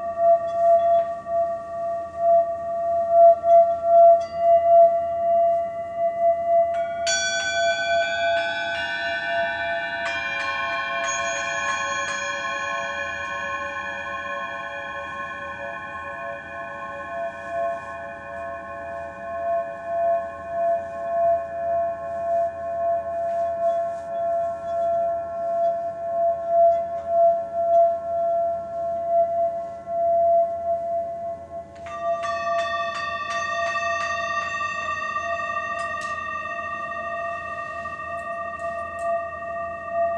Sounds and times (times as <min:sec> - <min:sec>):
Singing bowl: 0:00.0 - 0:40.1.